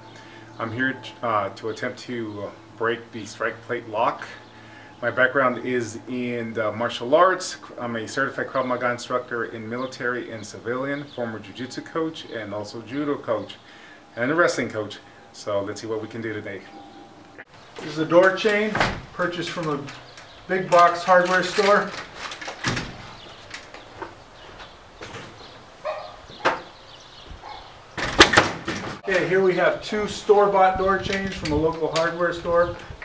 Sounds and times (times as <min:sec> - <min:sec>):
Speech: 0:00.6 - 0:13.6, 0:14.2 - 0:16.8, 0:17.8 - 0:22.0, 0:29.0 - 0:32.8
Door: 0:18.2 - 0:19.2, 0:22.2 - 0:23.2, 0:26.4 - 0:26.7, 0:28.0 - 0:29.0.